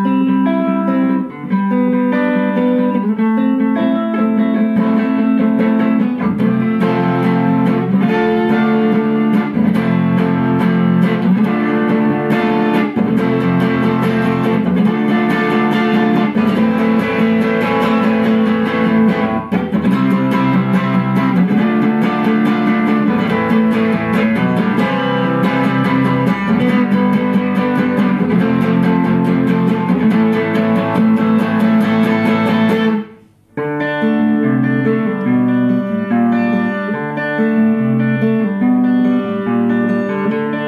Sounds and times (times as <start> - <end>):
Acoustic guitar: 0.0 - 40.6
Strum: 0.0 - 40.6.